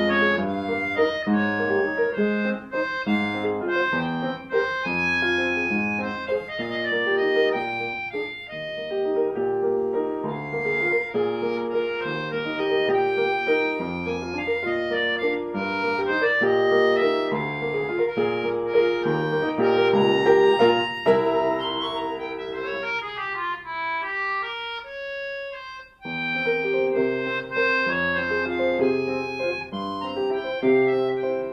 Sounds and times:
Tender music: 19.9s - 23.3s.

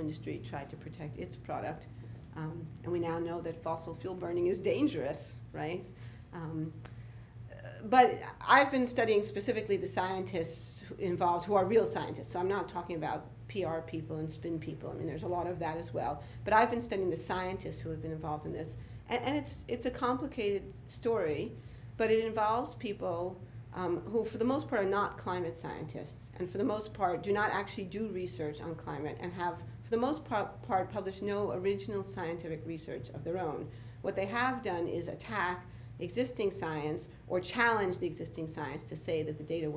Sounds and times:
Speech: 0.0s - 6.8s, 7.5s - 39.7s.

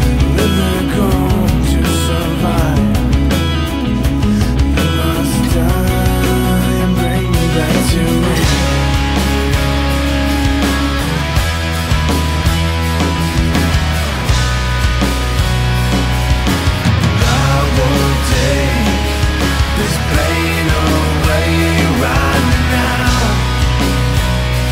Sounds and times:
Progressive rock: 0.0s - 24.7s.

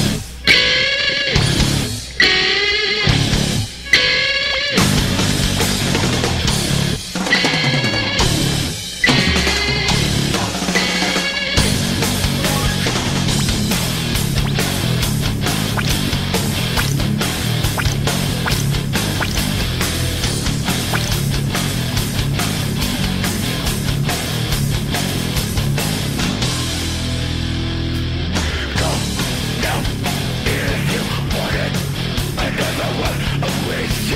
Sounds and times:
Music: 0.0s - 34.1s.

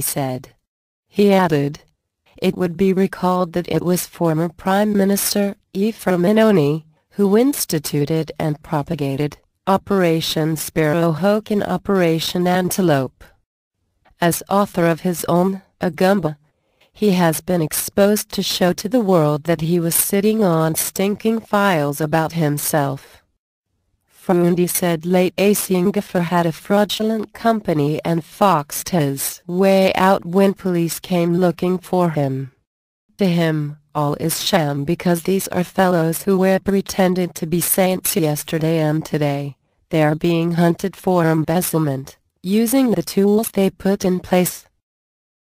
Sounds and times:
Speech: 0.0s - 0.6s, 1.2s - 1.8s, 2.4s - 13.4s, 14.1s - 16.4s, 17.0s - 23.2s, 24.2s - 32.6s, 33.2s - 44.8s.

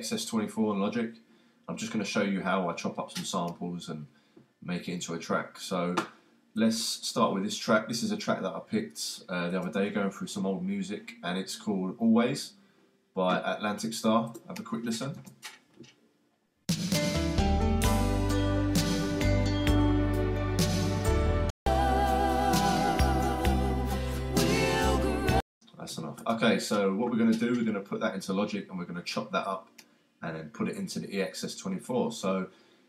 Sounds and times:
Speech: 0.0s - 12.6s, 13.2s - 15.2s, 25.7s - 32.5s
Music: 16.7s - 25.4s.

